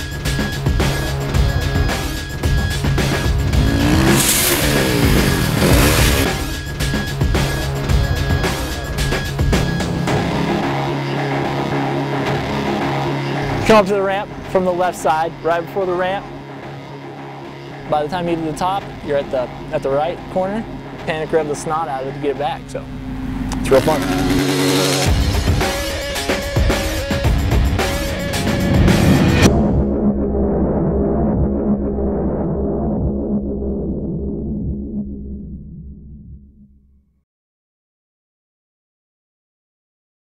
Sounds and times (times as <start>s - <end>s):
Music: 0.0s - 37.2s
Motorcycle: 2.5s - 7.6s, 22.2s - 29.5s
Speech: 13.6s - 16.3s, 17.9s - 22.9s, 23.6s - 24.2s.